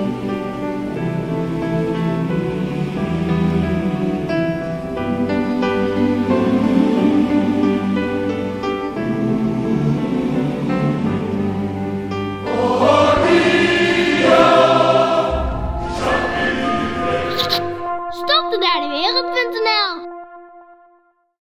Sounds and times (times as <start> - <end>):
Music: 0.0 - 21.4
Speech: 18.2 - 20.1.